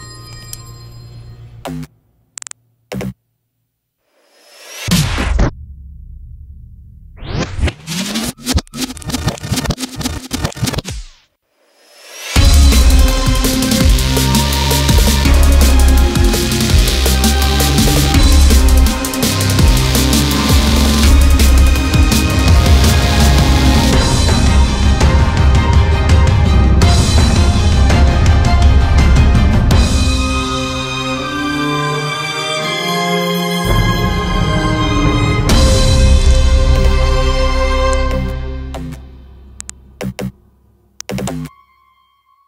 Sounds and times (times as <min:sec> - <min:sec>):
Drum and bass: 0:12.2 - 0:30.9, 0:34.7 - 0:39.1, 0:40.0 - 0:40.4, 0:41.0 - 0:41.5.